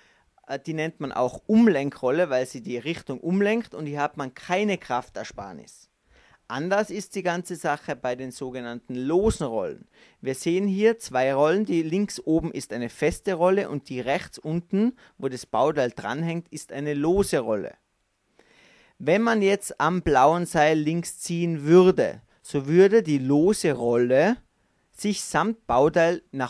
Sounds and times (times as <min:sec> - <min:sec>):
Speech: 0:00.4 - 0:05.9, 0:06.5 - 0:17.8, 0:19.0 - 0:26.5.